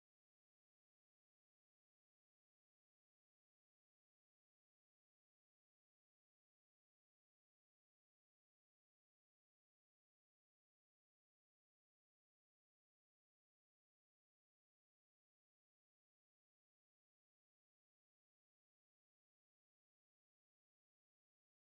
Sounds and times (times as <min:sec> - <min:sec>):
Music: 0:00.0 - 0:21.6.